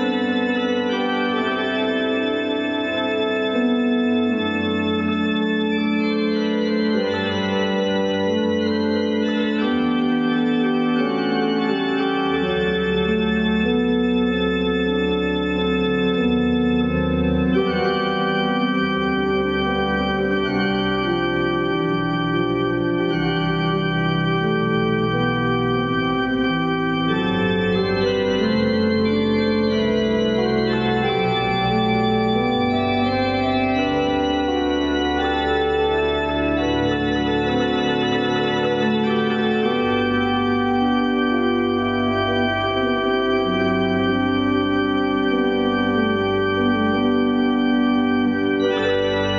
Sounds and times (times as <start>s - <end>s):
Electronic organ: 0.0s - 49.3s.